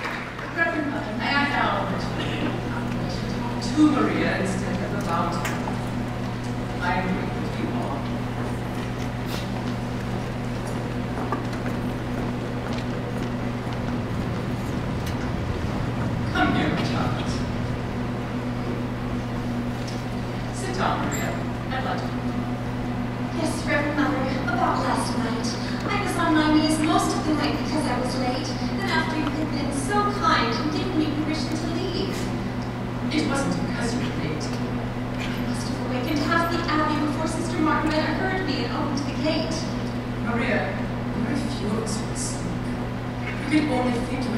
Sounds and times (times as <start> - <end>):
Speech: 0.5 - 5.8, 6.8 - 8.3, 16.3 - 17.5, 20.5 - 22.2, 23.3 - 32.3, 33.1 - 34.7, 35.5 - 42.6, 43.3 - 44.3.